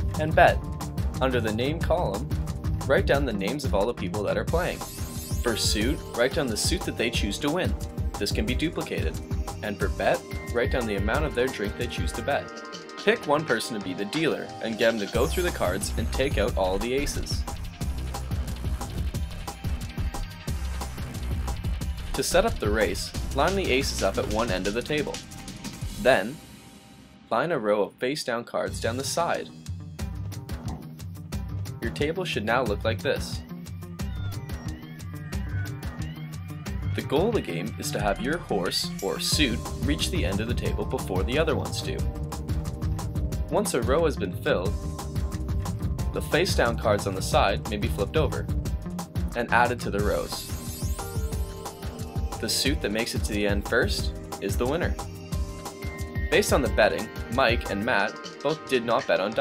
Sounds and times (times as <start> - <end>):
Music: 0.0 - 59.4
Speech: 0.2 - 0.6, 1.2 - 4.8, 5.5 - 17.4, 22.2 - 25.2, 26.0 - 26.4, 27.3 - 29.6, 31.8 - 33.4, 37.0 - 42.1, 43.5 - 44.8, 46.2 - 48.5, 49.4 - 50.5, 52.4 - 55.0, 56.3 - 59.4.